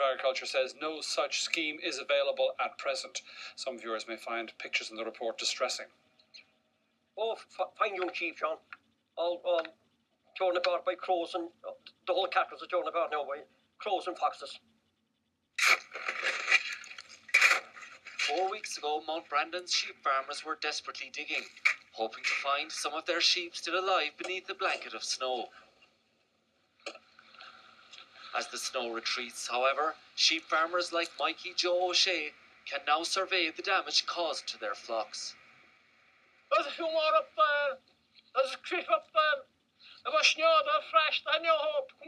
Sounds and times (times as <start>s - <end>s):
Speech: 0.0s - 5.9s, 7.2s - 9.8s, 10.4s - 14.6s, 18.2s - 25.6s, 28.3s - 35.4s, 36.5s - 37.8s, 38.4s - 42.0s.